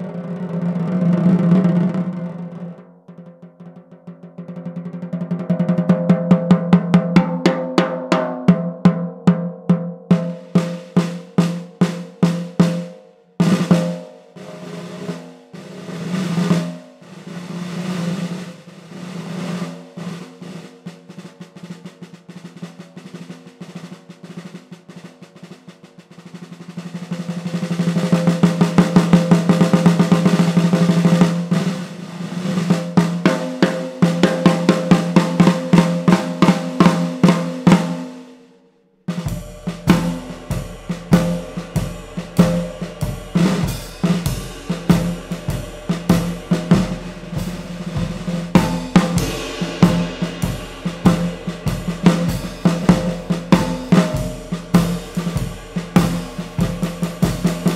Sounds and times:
Snare drum: 0:00.0 - 0:02.8, 0:03.4 - 0:38.5, 0:39.1 - 0:57.7
Cymbal: 0:10.1 - 0:57.7.

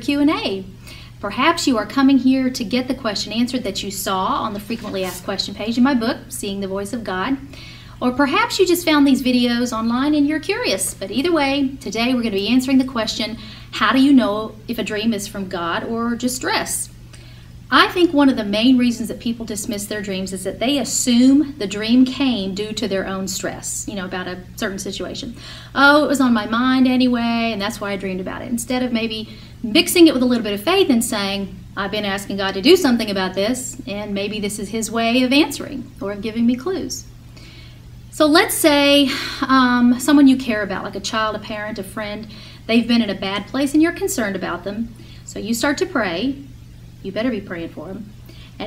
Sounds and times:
Speech: 0:00.0 - 0:16.9, 0:17.7 - 0:37.1, 0:38.2 - 0:46.4, 0:47.0 - 0:48.6
Inside, small room: 0:00.0 - 0:48.6.

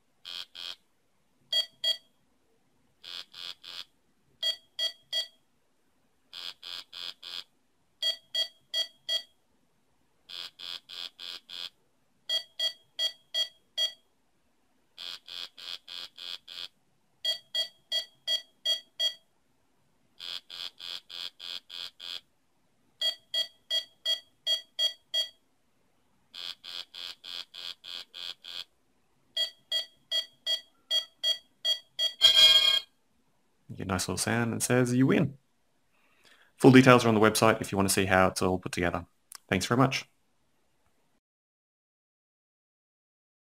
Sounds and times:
Inside, small room: 0:00.0 - 0:41.2
Speech: 0:33.7 - 0:35.4, 0:36.6 - 0:40.1.

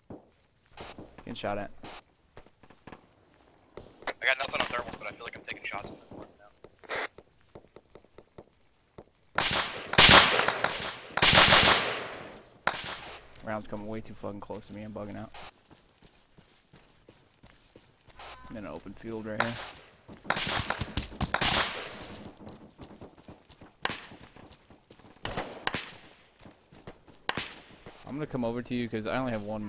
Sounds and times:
Outside, rural or natural: 0:00.0 - 0:29.6
Speech: 0:01.2 - 0:01.8, 0:04.1 - 0:06.5, 0:13.4 - 0:15.4, 0:18.5 - 0:19.6, 0:28.0 - 0:29.6.

